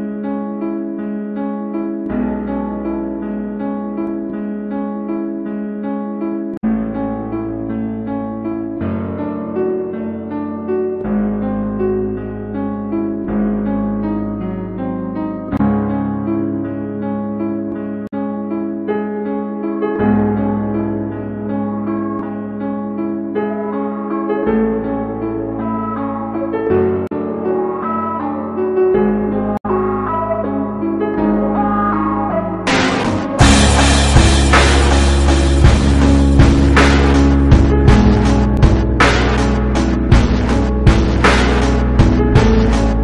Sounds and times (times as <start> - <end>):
Music: 0.0 - 43.0.